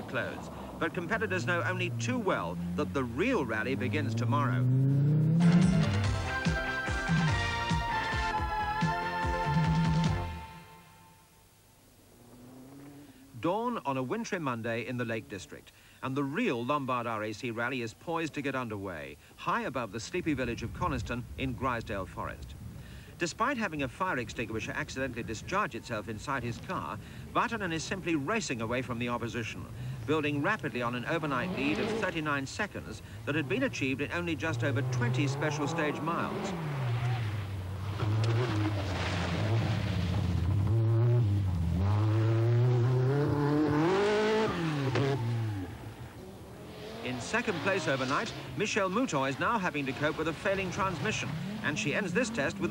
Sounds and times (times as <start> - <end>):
Speech: 0.0 - 4.7, 13.4 - 22.6, 23.2 - 36.6, 47.0 - 52.7
Car: 0.0 - 6.5, 10.4 - 16.5, 17.1 - 52.7.